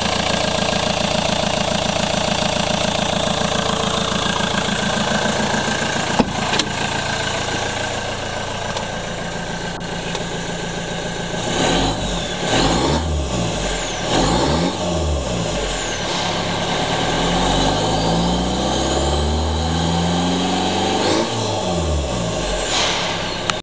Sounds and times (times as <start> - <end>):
Vehicle: 0.0 - 23.6
Accelerating, revving, vroom: 11.4 - 23.2.